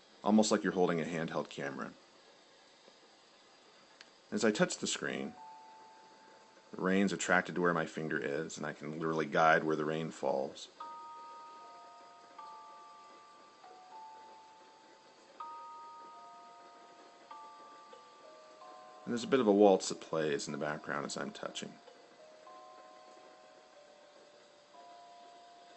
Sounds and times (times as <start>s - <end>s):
Speech: 0.3s - 2.0s, 4.3s - 5.4s, 6.8s - 10.8s, 19.1s - 21.8s
Music: 4.3s - 25.7s.